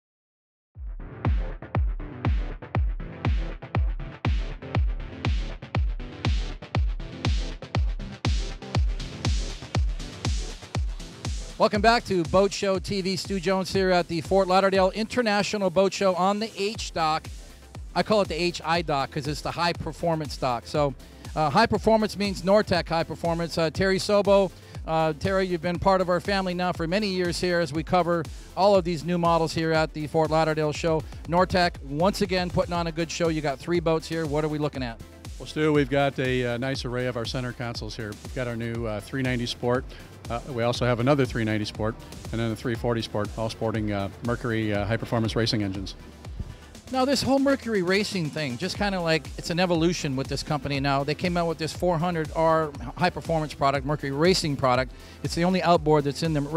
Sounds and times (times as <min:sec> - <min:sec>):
Music: 0:00.8 - 0:56.5
Speech: 0:11.6 - 0:17.2, 0:18.0 - 0:46.0, 0:46.9 - 0:56.5.